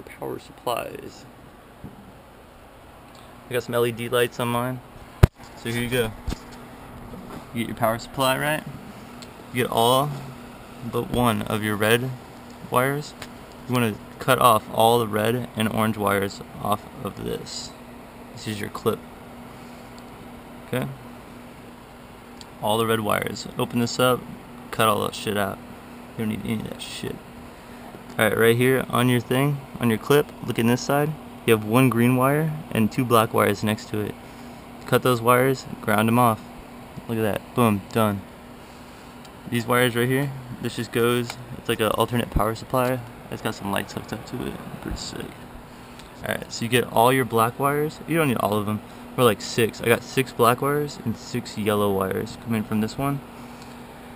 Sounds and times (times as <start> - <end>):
Speech: 0.0 - 1.3, 3.5 - 4.9, 5.6 - 6.2, 7.5 - 8.7, 9.5 - 17.8, 18.4 - 19.0, 20.7 - 21.0, 22.6 - 25.6, 26.2 - 27.2, 28.2 - 34.2, 34.9 - 38.3, 39.5 - 45.4, 46.2 - 53.2.